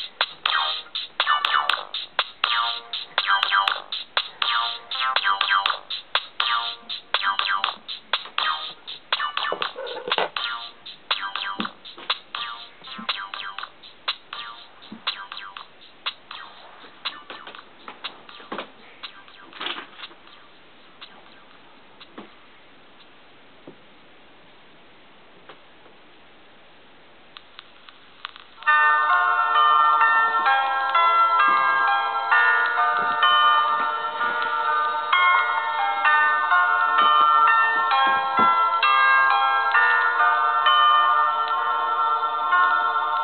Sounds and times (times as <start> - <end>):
Music: 0.0 - 22.2, 28.6 - 43.2
Inside, small room: 0.0 - 43.2.